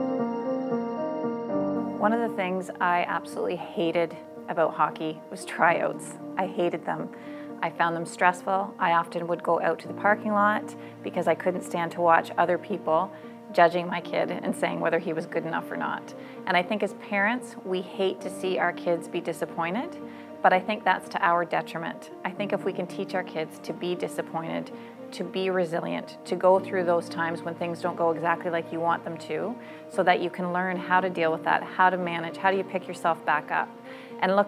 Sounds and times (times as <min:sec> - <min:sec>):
Music: 0:00.0 - 0:34.4
Speech: 0:02.0 - 0:34.4.